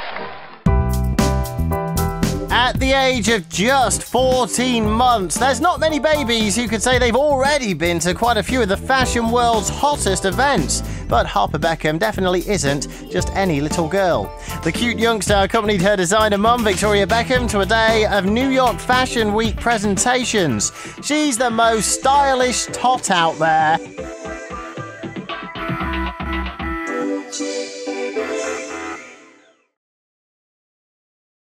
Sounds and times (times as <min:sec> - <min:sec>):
Music: 0:00.5 - 0:29.8
Speech: 0:02.5 - 0:23.8.